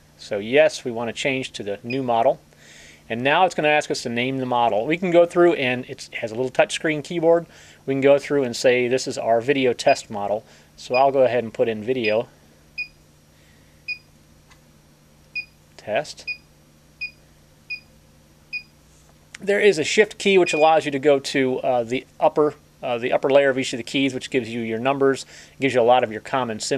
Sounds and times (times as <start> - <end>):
Speech: 0.2 - 2.4, 3.1 - 12.3, 15.8 - 16.3, 19.4 - 26.7.